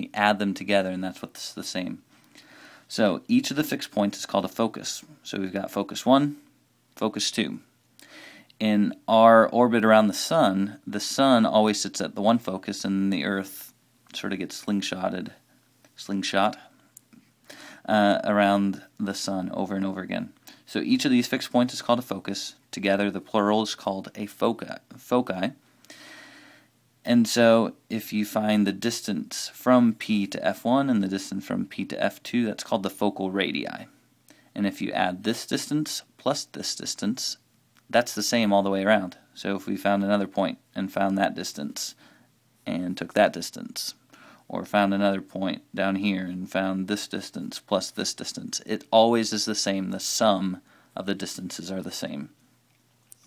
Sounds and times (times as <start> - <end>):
Speech: 0.0 - 2.0, 2.9 - 7.7, 8.6 - 15.4, 16.0 - 16.7, 17.8 - 25.6, 27.0 - 34.0, 34.6 - 42.0, 42.6 - 52.4.